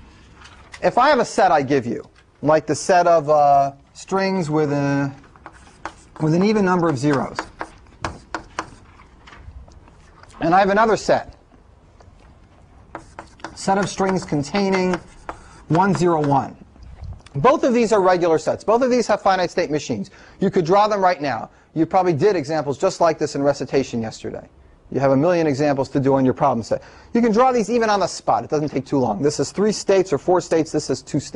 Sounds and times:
Speech: 0.8 - 5.2, 6.2 - 7.5, 10.4 - 11.4, 13.6 - 15.1, 15.7 - 16.6, 17.4 - 31.3.

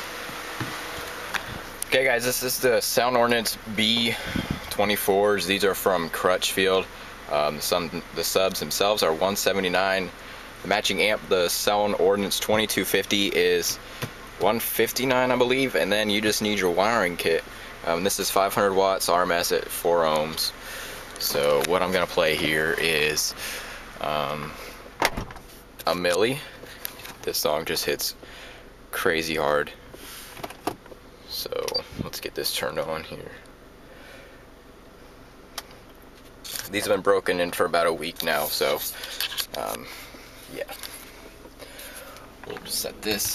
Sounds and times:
Speech: 1.9 - 13.8, 14.4 - 20.6, 21.2 - 23.4, 24.0 - 24.6, 25.8 - 26.6, 27.2 - 28.2, 28.9 - 29.8, 31.3 - 33.4, 36.5 - 39.9, 40.5 - 40.8, 42.5 - 43.3.

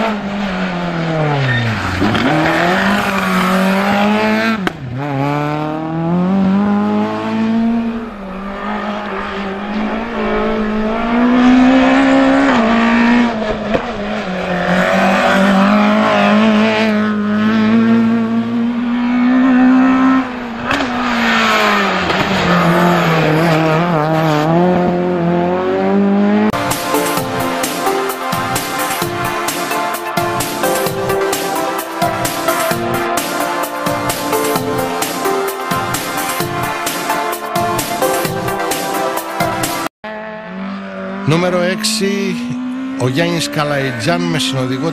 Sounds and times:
Music: 26.6 - 39.9.

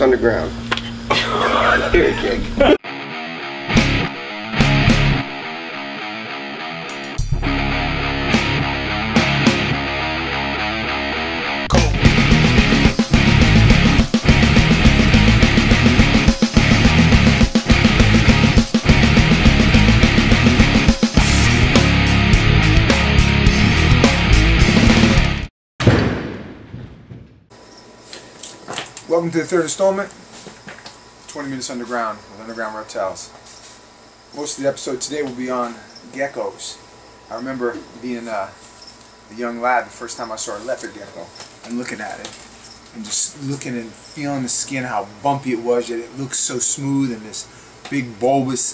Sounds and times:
Speech: 0.0 - 0.6, 1.4 - 2.6, 29.1 - 30.2, 31.3 - 33.4, 34.4 - 38.6, 39.3 - 48.7.

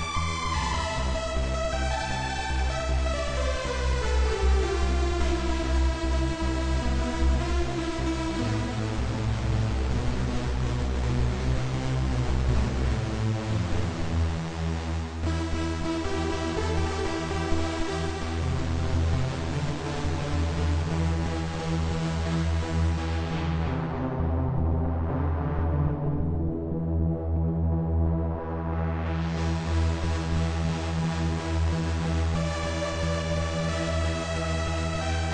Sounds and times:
Music: 0.0 - 35.3.

